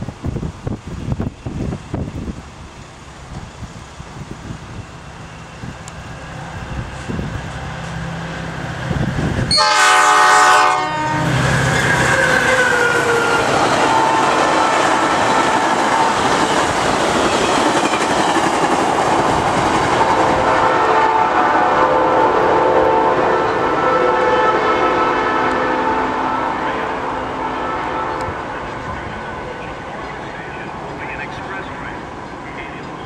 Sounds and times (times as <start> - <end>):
Speech: 28.8 - 33.0.